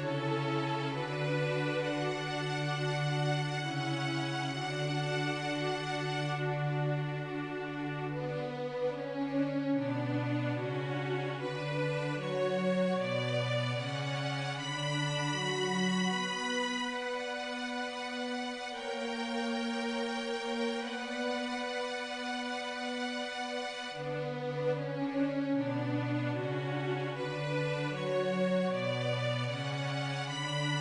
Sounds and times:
Tender music: 0.0 - 30.8.

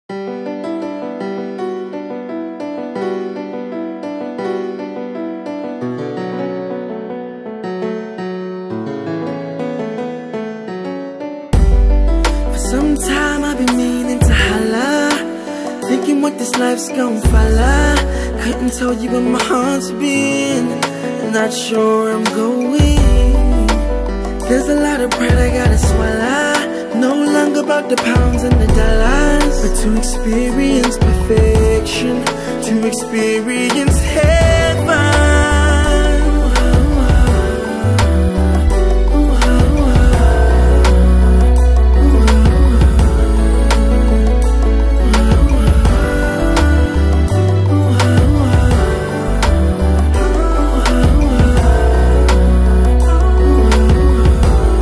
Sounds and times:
Electric piano: 0.1 - 54.8.

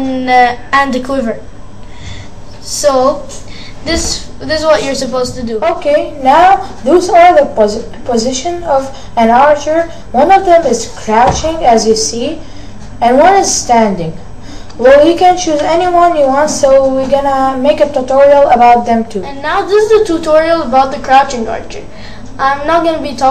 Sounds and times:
Speech: 0.0 - 1.4, 2.6 - 12.4, 14.8 - 23.3.

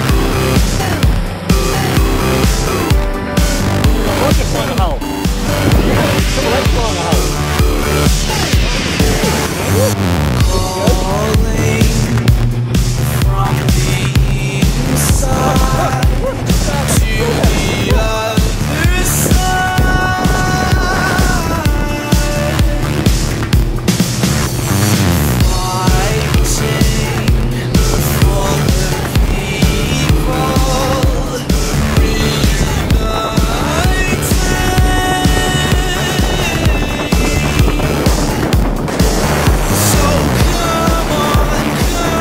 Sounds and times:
Music: 0.0 - 42.2
Speech: 4.0 - 5.0, 6.0 - 7.4, 9.7 - 11.5.

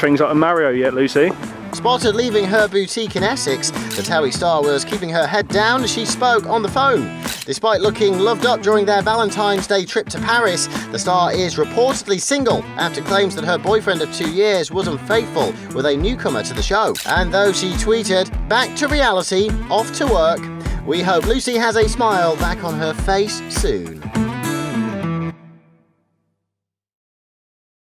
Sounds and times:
Speech: 0.0 - 24.0
Music: 0.0 - 26.6.

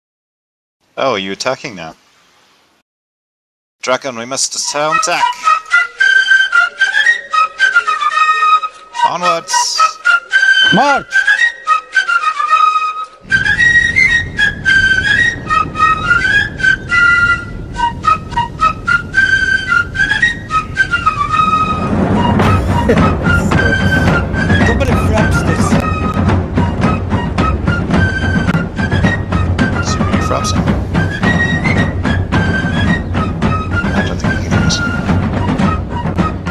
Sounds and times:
Speech: 1.0 - 2.0, 3.8 - 5.4, 9.0 - 10.0, 10.7 - 11.1, 24.7 - 25.8
Outside, rural or natural: 3.8 - 36.5
Music: 4.3 - 36.5.

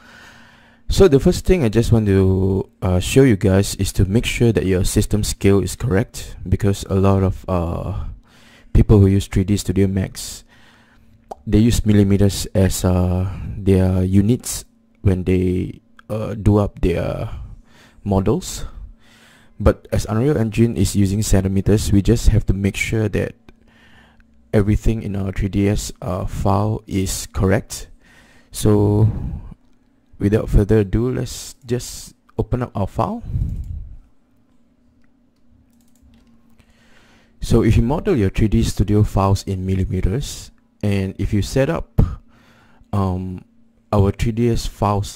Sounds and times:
Speech: 0.9 - 8.2, 8.8 - 10.5, 11.4 - 18.8, 19.6 - 23.4, 24.5 - 27.9, 28.5 - 29.6, 30.2 - 33.6, 37.4 - 42.2, 42.9 - 45.1.

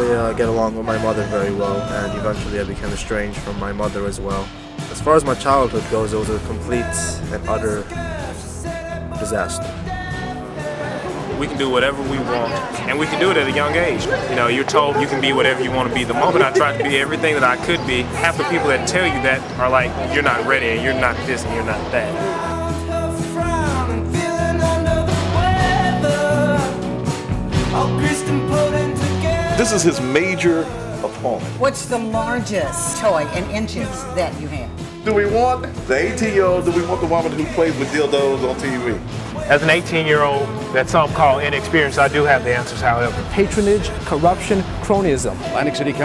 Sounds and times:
Speech: 0.0 - 8.0, 11.3 - 22.4, 29.6 - 46.0.

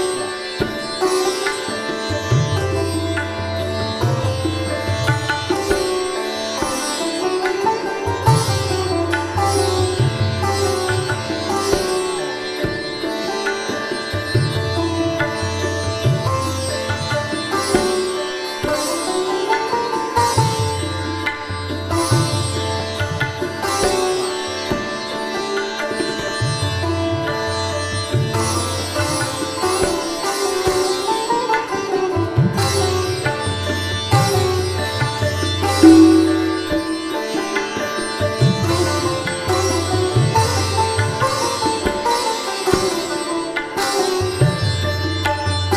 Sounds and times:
Sitar: 0.0 - 45.7.

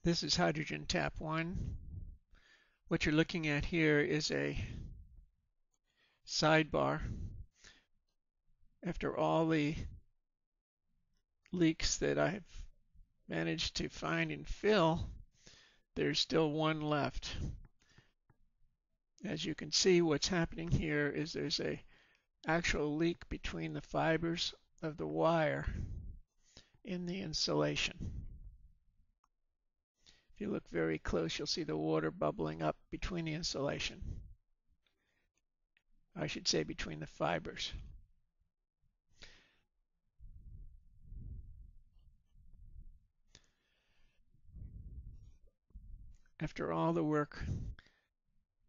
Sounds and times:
Speech: 0.0 - 1.7, 2.9 - 4.8, 6.3 - 7.2, 8.8 - 10.0, 11.5 - 12.6, 13.3 - 15.2, 16.0 - 17.6, 19.2 - 25.8, 26.9 - 28.2, 30.4 - 34.2, 36.2 - 38.0, 46.4 - 47.8.

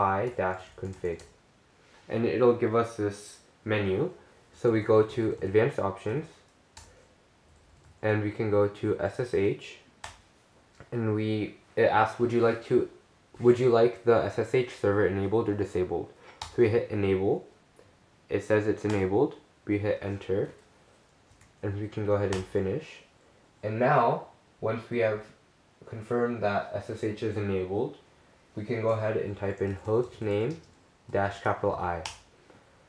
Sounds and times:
Speech: 0.0 - 1.4, 2.1 - 6.4, 8.0 - 9.9, 10.8 - 17.6, 18.3 - 20.6, 21.6 - 28.0, 28.6 - 32.2.

